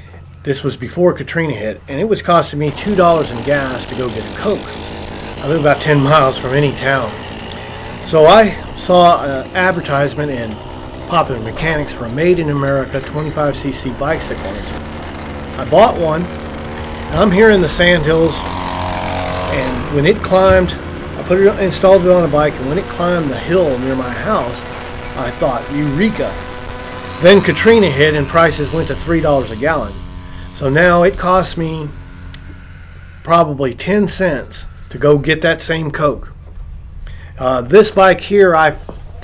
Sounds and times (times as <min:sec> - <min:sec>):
Speech: 0:00.4 - 0:04.8, 0:05.4 - 0:07.2, 0:08.1 - 0:14.8, 0:15.6 - 0:16.3, 0:17.1 - 0:18.5, 0:19.5 - 0:26.4, 0:27.2 - 0:30.0, 0:30.6 - 0:31.9, 0:33.3 - 0:36.4, 0:37.4 - 0:38.8
Bicycle: 0:02.6 - 0:33.4.